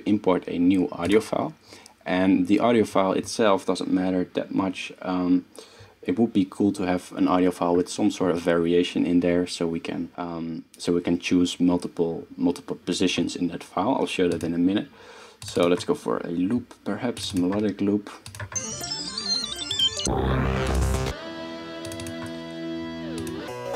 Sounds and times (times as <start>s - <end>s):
Speech: 0.0s - 18.3s.